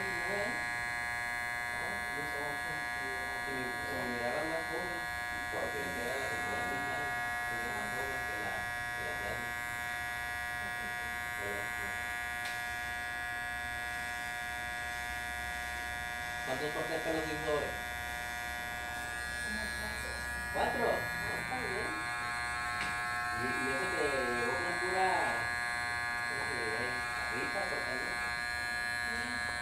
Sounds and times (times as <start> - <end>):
Speech: 1.8 - 9.5, 10.7 - 12.0, 16.5 - 17.8, 23.4 - 25.5, 26.3 - 28.3.